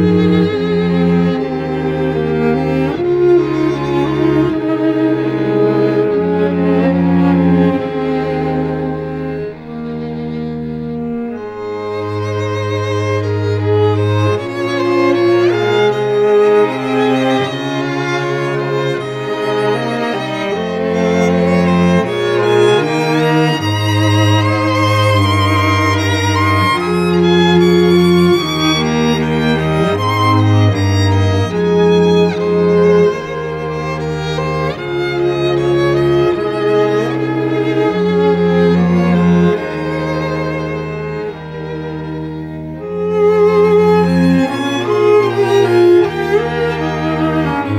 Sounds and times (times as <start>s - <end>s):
Cello: 0.0s - 47.7s
Violin, fiddle: 0.0s - 47.7s.